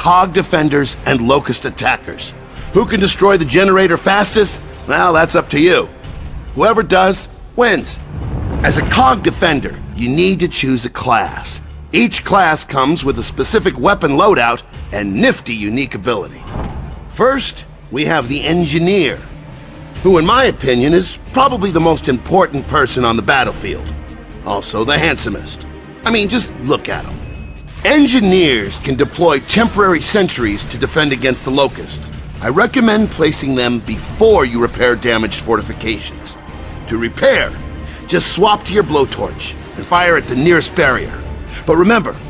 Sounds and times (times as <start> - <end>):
Speech: 0.0 - 5.9, 6.6 - 8.0, 8.6 - 16.5, 17.1 - 19.3, 20.0 - 27.2, 27.8 - 42.2
Music: 0.0 - 42.2.